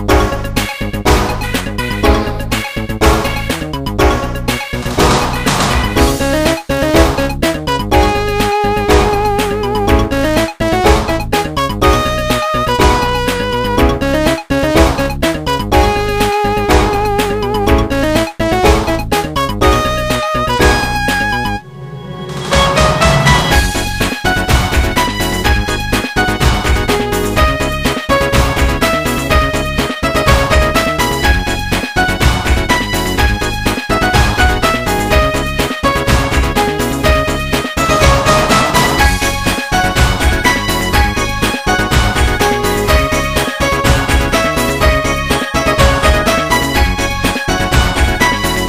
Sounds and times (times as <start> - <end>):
Music: 0.0 - 48.6.